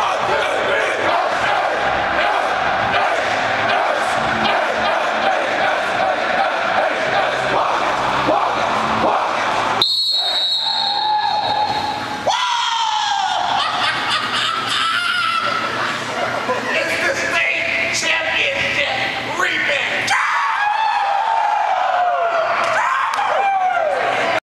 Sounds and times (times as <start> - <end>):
Speech: 16.5 - 20.1.